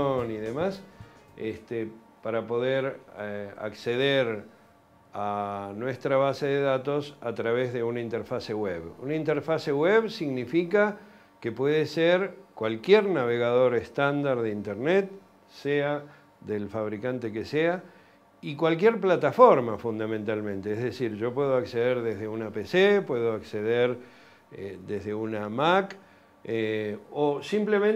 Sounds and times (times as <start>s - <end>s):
Speech: 0.0s - 4.5s, 5.2s - 17.8s, 18.4s - 27.9s.